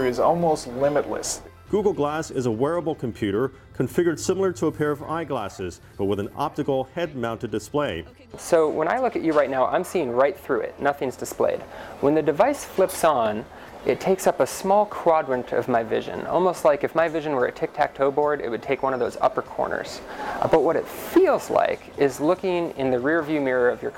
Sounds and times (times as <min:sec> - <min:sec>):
Speech: 0:00.0 - 0:23.9.